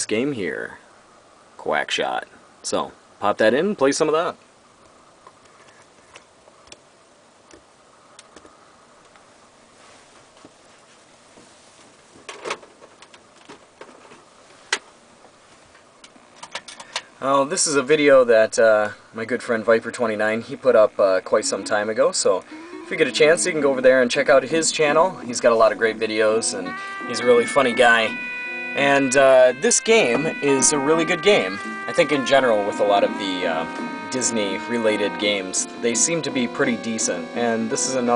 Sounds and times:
Speech: 0.0 - 0.8, 1.6 - 4.4, 17.2 - 28.2, 28.8 - 38.1
Music: 21.4 - 21.8, 22.5 - 38.1.

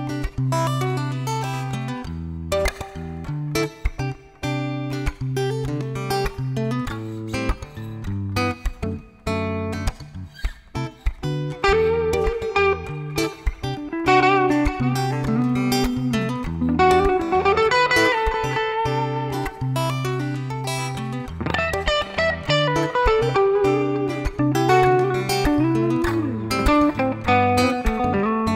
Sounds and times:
Acoustic guitar: 0.0 - 28.5
Electric guitar: 0.0 - 28.5
Strum: 0.0 - 28.5.

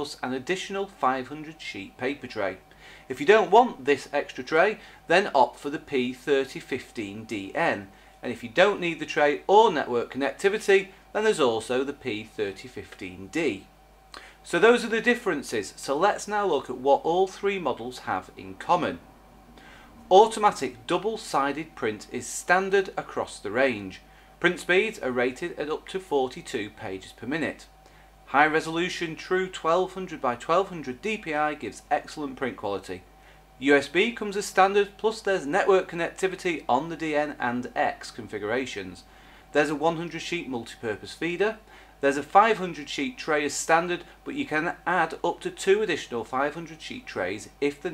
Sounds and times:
Speech: 0.0 - 19.0, 20.1 - 47.9.

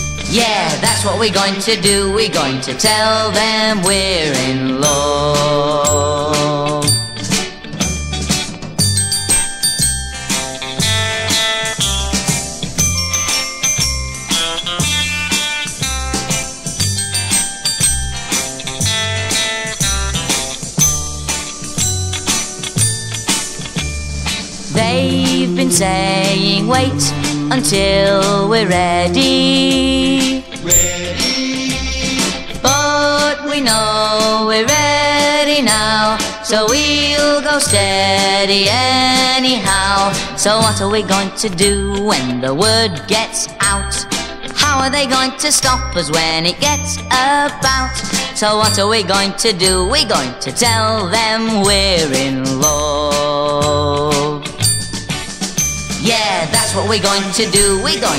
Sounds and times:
Music: 0.0 - 58.1.

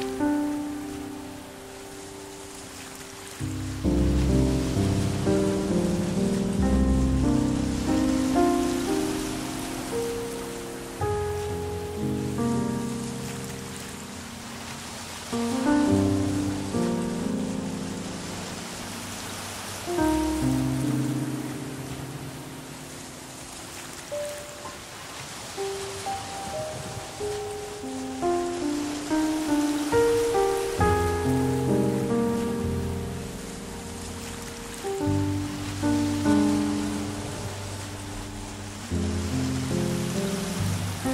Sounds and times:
Music: 0.0 - 41.1
Stream: 0.0 - 41.1.

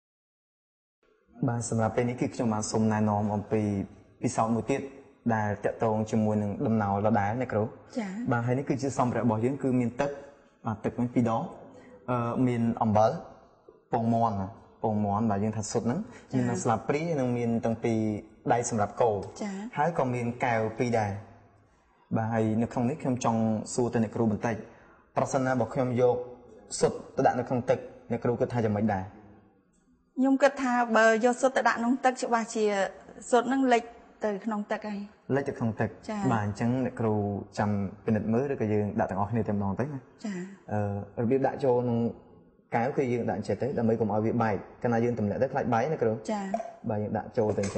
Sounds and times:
Speech: 1.4 - 13.2, 13.9 - 21.2, 22.1 - 24.6, 25.2 - 29.1, 30.2 - 42.2, 42.8 - 47.7.

